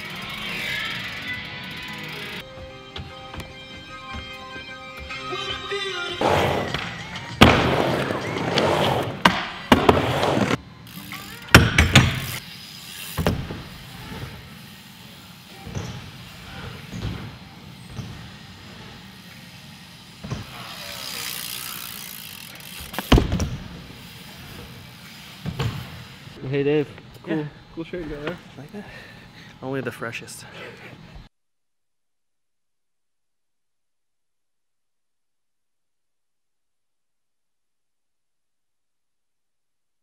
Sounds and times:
Bicycle: 0:00.0 - 0:04.3, 0:06.2 - 0:26.6.

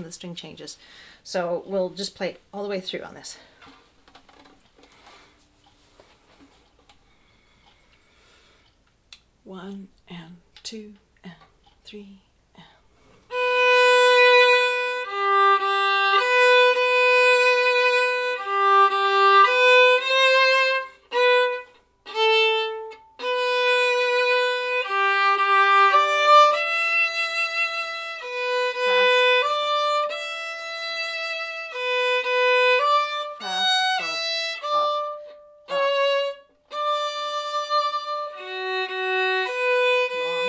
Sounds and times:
Violin, fiddle: 0:13.3 - 0:40.4.

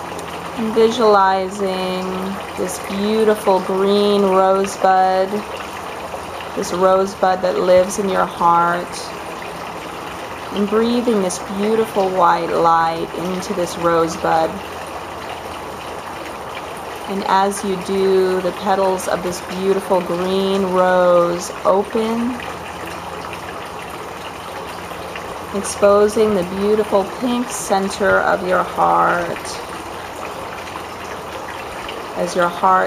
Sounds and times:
Speech: 0:00.6 - 0:05.5, 0:06.6 - 0:09.1, 0:10.6 - 0:14.6, 0:17.1 - 0:22.4, 0:25.6 - 0:29.6, 0:32.2 - 0:32.8.

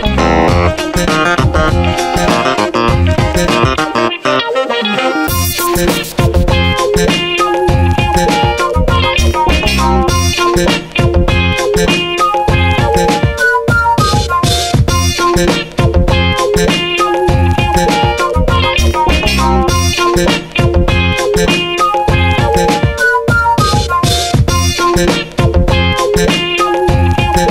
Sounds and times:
Electronica: 0:00.0 - 0:25.1.

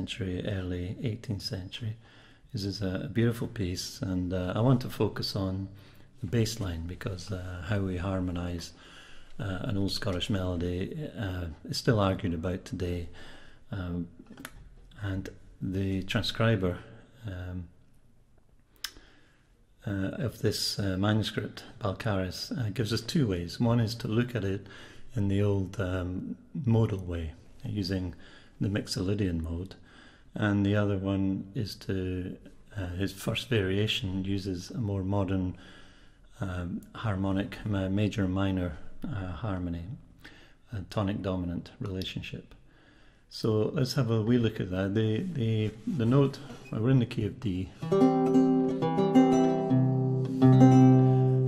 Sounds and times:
Speech: 0:00.0 - 0:08.8, 0:09.4 - 0:17.8, 0:19.8 - 0:35.6, 0:36.4 - 0:40.1, 0:40.7 - 0:42.6, 0:43.3 - 0:47.8.

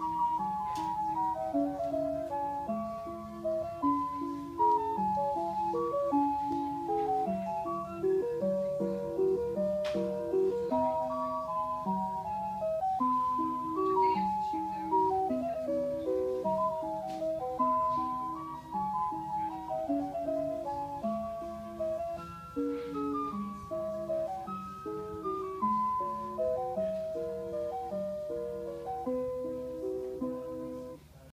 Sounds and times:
Music: 0:00.0 - 0:31.3.

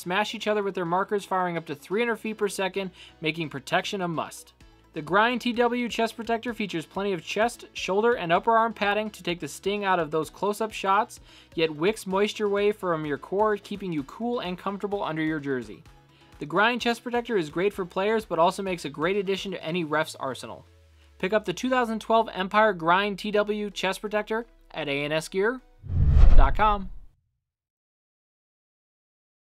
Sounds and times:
Speech: 0:00.0 - 0:15.8, 0:16.4 - 0:20.6, 0:21.2 - 0:25.7, 0:26.4 - 0:26.9.

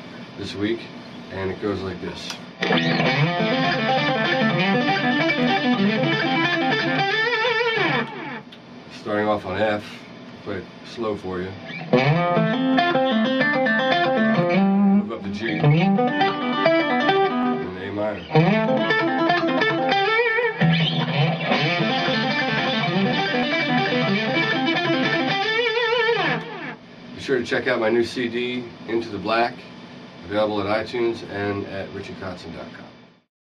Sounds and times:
Speech: 0:00.4 - 0:02.4, 0:08.9 - 0:11.6, 0:15.0 - 0:15.7, 0:17.6 - 0:18.2, 0:27.2 - 0:32.9
Electric guitar: 0:02.3 - 0:08.6, 0:11.6 - 0:26.9.

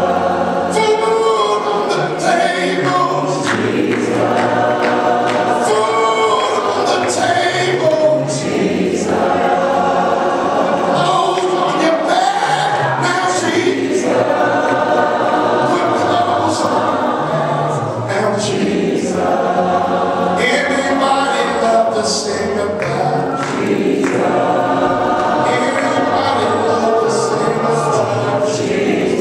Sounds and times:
Gospel music: 0:00.0 - 0:29.2
Singing: 0:00.0 - 0:29.2.

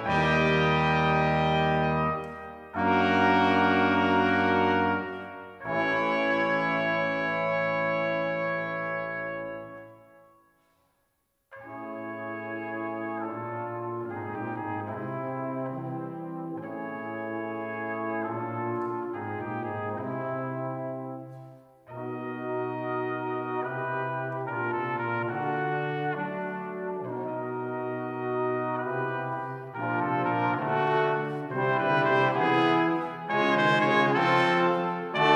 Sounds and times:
Trombone: 0:00.0 - 0:10.1, 0:11.5 - 0:35.3
Trumpet: 0:00.0 - 0:10.8, 0:11.5 - 0:35.3
French horn: 0:00.0 - 0:35.3.

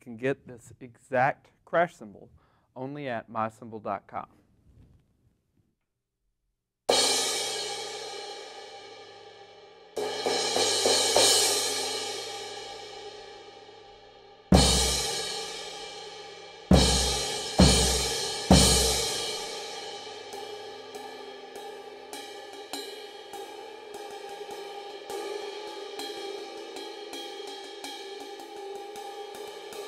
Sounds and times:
Cymbal: 0:06.9 - 0:29.8.

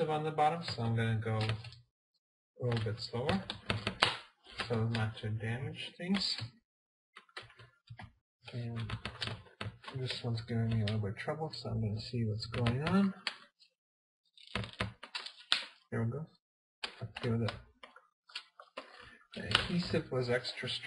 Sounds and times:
Speech: 0:00.0 - 0:01.6, 0:02.6 - 0:03.5, 0:04.6 - 0:06.5, 0:08.5 - 0:09.0, 0:09.9 - 0:13.2, 0:16.0 - 0:16.4, 0:17.1 - 0:17.6, 0:19.4 - 0:20.8
Inside, small room: 0:00.0 - 0:01.9, 0:02.6 - 0:06.6, 0:07.2 - 0:13.7, 0:14.4 - 0:20.8.

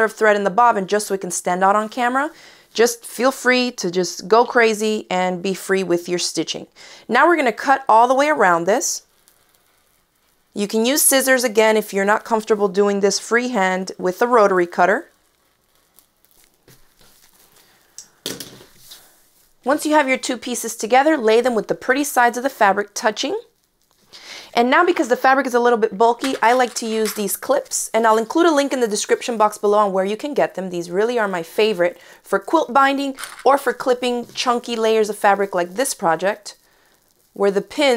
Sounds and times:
Speech: 0:00.0 - 0:09.0, 0:10.6 - 0:15.1, 0:19.7 - 0:23.5, 0:24.6 - 0:36.6, 0:37.4 - 0:37.9
Inside, small room: 0:00.0 - 0:37.9.

